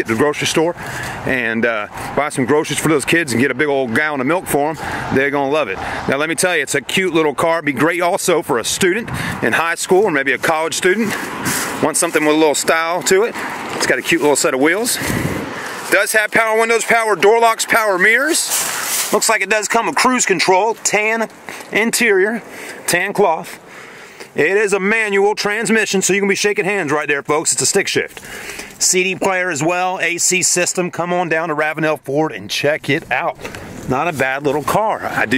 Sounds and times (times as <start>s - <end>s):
Speech: 0.0s - 11.2s, 11.8s - 15.0s, 15.9s - 23.6s, 24.4s - 28.2s, 28.8s - 35.3s
Vehicle: 0.0s - 35.3s.